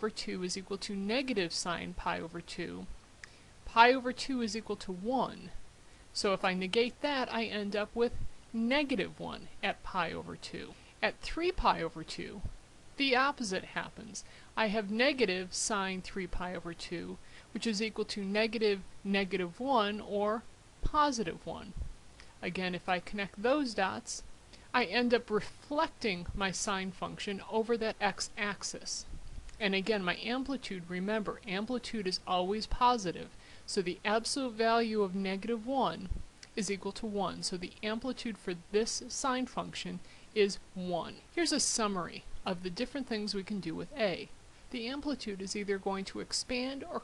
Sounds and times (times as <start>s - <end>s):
Narration, monologue: 0.0s - 47.0s.